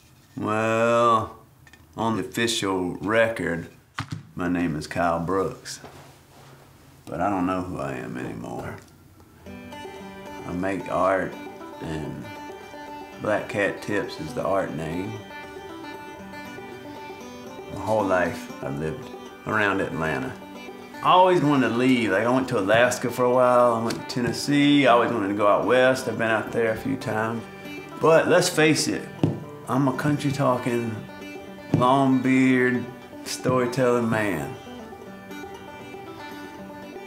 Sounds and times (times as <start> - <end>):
Speech: 0.4 - 1.4, 2.0 - 3.7, 4.4 - 5.9, 7.1 - 8.8, 10.4 - 12.3, 13.2 - 15.2, 17.7 - 20.4, 21.0 - 27.4, 28.0 - 29.1, 29.7 - 31.0, 31.8 - 34.6
Music: 7.5 - 37.0.